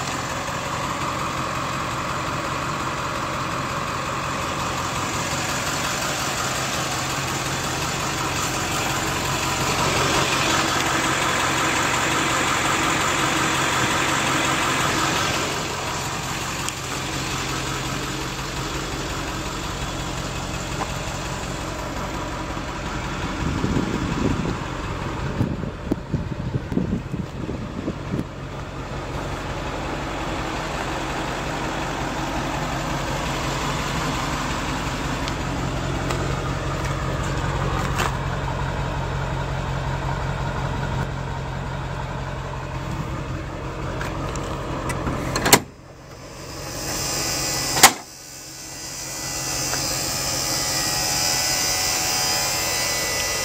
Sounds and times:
Bus: 0:00.0 - 0:53.4
Heavy engine (low frequency): 0:00.0 - 0:53.4
Outside, urban or manmade: 0:00.0 - 0:53.4.

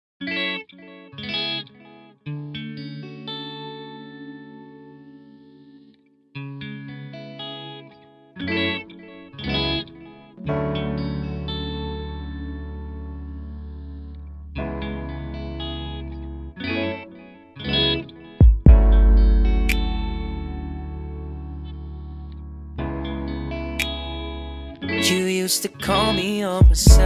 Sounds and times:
Chorus effect: 0:00.2 - 0:27.0
Music: 0:00.2 - 0:27.0.

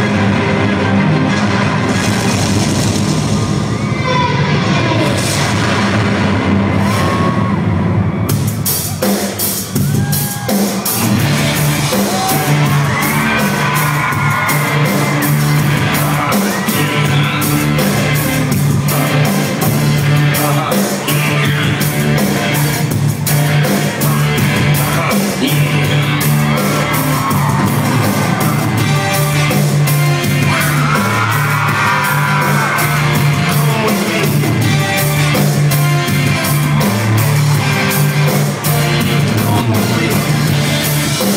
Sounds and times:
Pop music: 0:00.0 - 0:41.3
Whoop: 0:06.8 - 0:07.8, 0:09.8 - 0:10.9, 0:12.0 - 0:15.3, 0:26.6 - 0:28.8, 0:30.5 - 0:33.1.

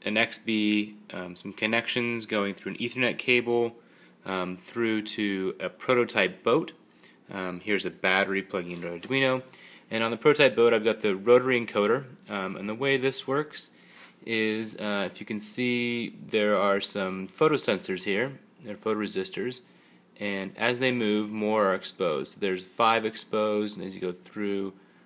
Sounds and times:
Speech: 0:00.0 - 0:24.8.

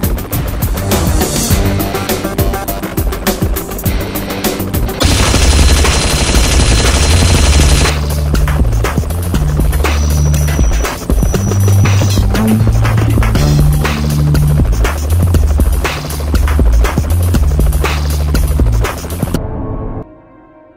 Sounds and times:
Helicopter: 0:00.0 - 0:19.4
Music: 0:00.0 - 0:20.7.

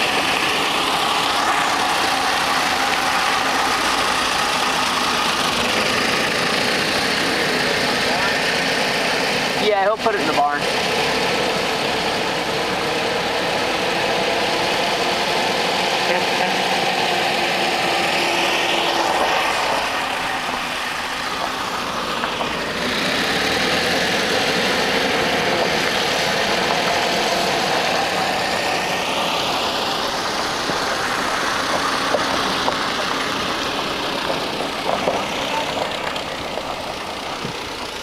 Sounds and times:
Motor vehicle (road): 0:00.0 - 0:38.0.

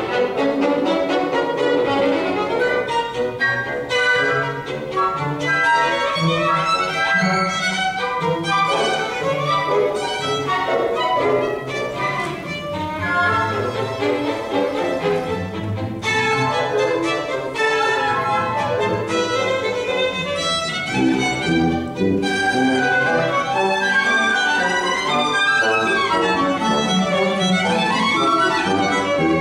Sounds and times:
Orchestra: 0:00.0 - 0:29.4
Violin, fiddle: 0:00.0 - 0:29.4.

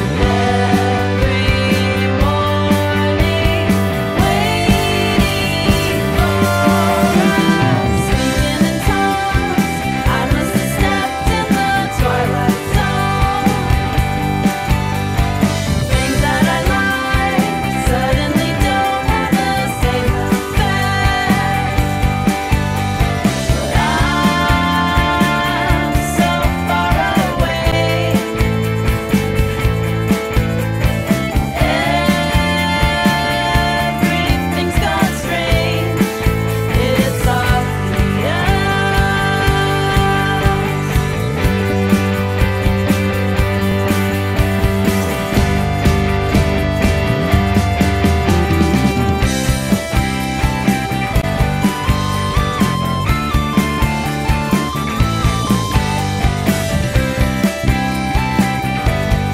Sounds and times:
Singing: 0:00.0 - 0:14.4, 0:15.9 - 0:22.2, 0:23.2 - 0:28.6, 0:31.3 - 0:41.4
Drum kit: 0:00.0 - 0:59.3
Pop music: 0:00.0 - 0:59.3.

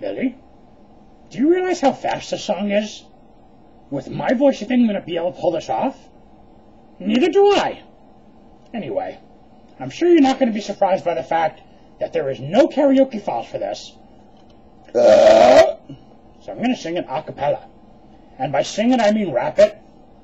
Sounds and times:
Speech: 0:00.0 - 0:00.4, 0:01.3 - 0:03.1, 0:03.9 - 0:06.1, 0:07.0 - 0:07.9, 0:08.7 - 0:09.2, 0:09.8 - 0:14.0, 0:16.4 - 0:17.7, 0:18.4 - 0:19.8.

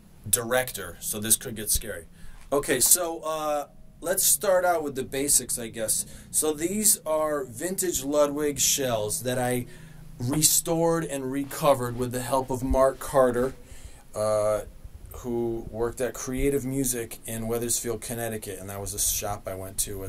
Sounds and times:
Speech: 0:00.3 - 0:13.6, 0:14.2 - 0:20.0.

